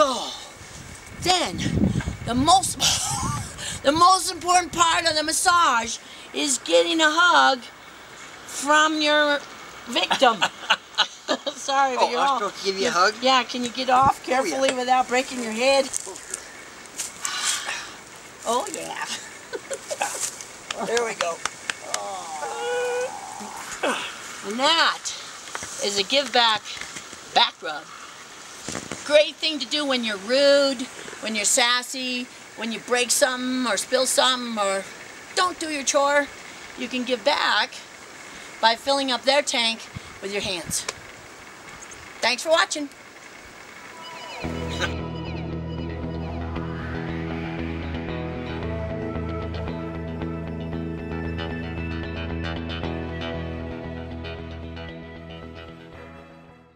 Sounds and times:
Male speech, man speaking: 0:11.8 - 0:14.8, 0:20.7 - 0:22.5.

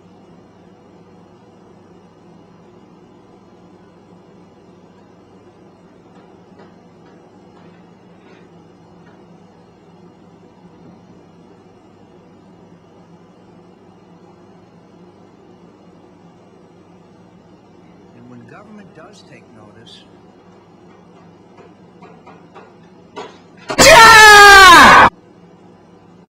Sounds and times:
Speech: 0:18.1 - 0:20.1.

